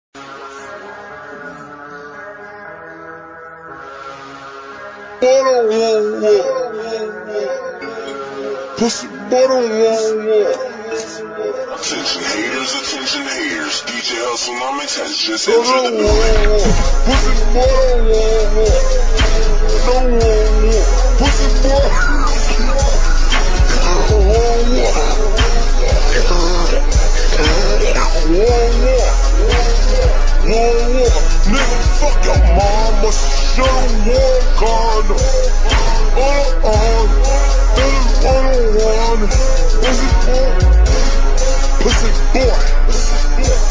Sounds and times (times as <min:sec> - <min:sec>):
Music: 0:00.0 - 0:43.7.